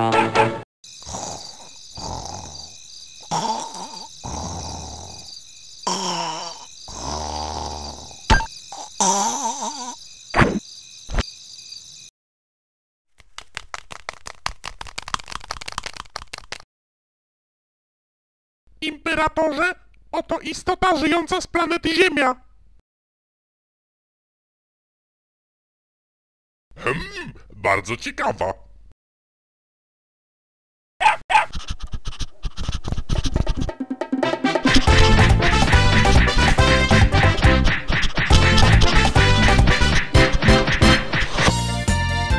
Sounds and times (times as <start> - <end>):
Music: 0.0 - 0.6, 33.7 - 42.3
Speech: 18.8 - 22.5, 26.8 - 28.7
Bow-wow: 31.0 - 31.6.